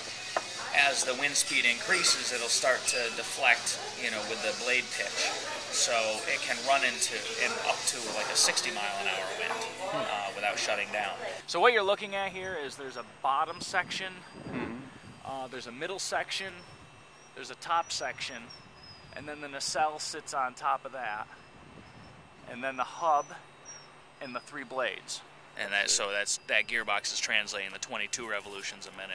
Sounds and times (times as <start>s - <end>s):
Speech: 0.6s - 16.6s, 17.4s - 18.5s, 19.2s - 21.3s, 22.5s - 23.4s, 24.2s - 29.1s.